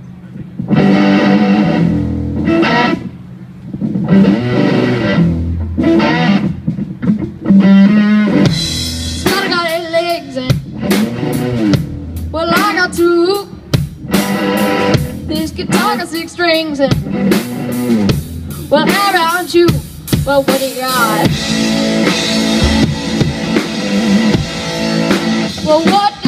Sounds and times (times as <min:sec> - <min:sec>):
Speech: 0:00.0 - 0:00.6, 0:18.8 - 0:21.3
Music: 0:00.6 - 0:26.2.